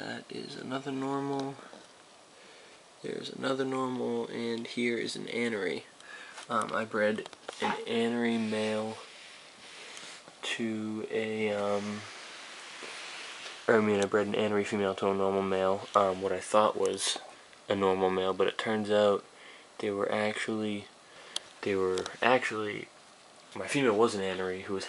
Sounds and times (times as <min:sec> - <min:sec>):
Speech: 0:00.0 - 0:01.7, 0:03.0 - 0:05.9, 0:06.5 - 0:09.1, 0:10.4 - 0:12.1, 0:13.7 - 0:20.9, 0:21.6 - 0:22.9, 0:23.6 - 0:24.8.